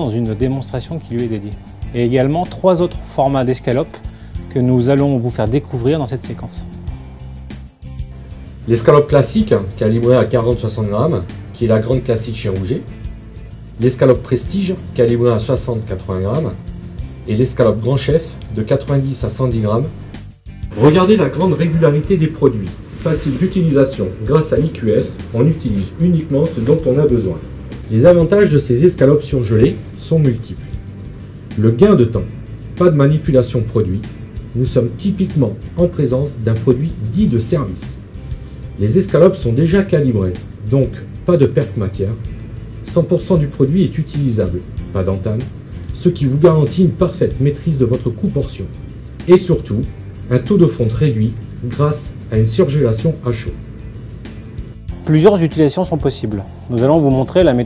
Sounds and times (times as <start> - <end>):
Speech: 0.0 - 6.7, 8.7 - 12.9, 13.8 - 16.6, 17.3 - 20.0, 20.8 - 30.7, 31.6 - 38.0, 38.8 - 53.6, 55.0 - 57.6
Music: 0.0 - 57.6.